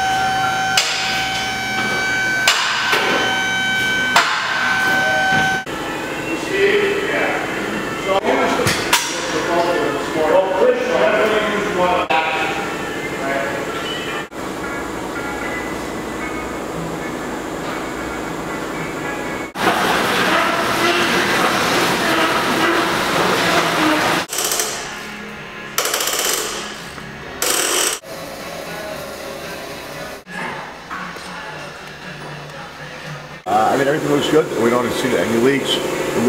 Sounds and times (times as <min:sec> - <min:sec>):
Speech: 0:06.3 - 0:12.6, 0:33.5 - 0:36.2.